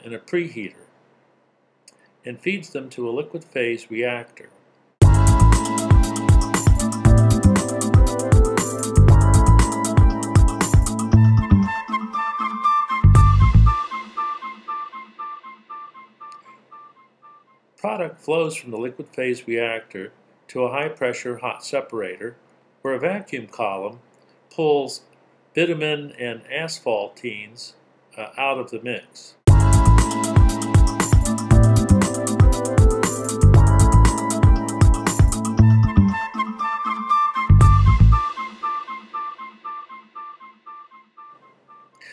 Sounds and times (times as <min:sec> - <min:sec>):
Speech: 0:00.0 - 0:00.9, 0:02.3 - 0:04.6, 0:17.8 - 0:24.0, 0:24.6 - 0:29.4
Music: 0:05.0 - 0:17.6, 0:29.5 - 0:42.1.